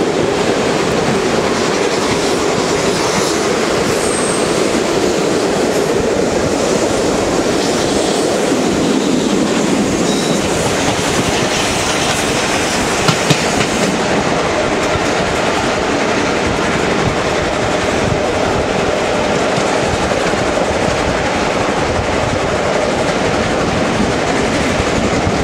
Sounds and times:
Railroad car, train wagon: 0.0s - 25.4s
Train: 0.0s - 25.4s
Clickety-clack: 0.4s - 6.0s, 7.4s - 25.4s.

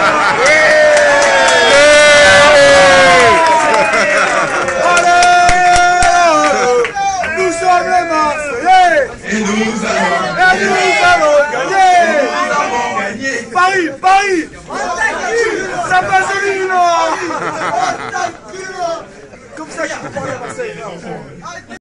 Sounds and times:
Speech: 6.2s - 21.8s.

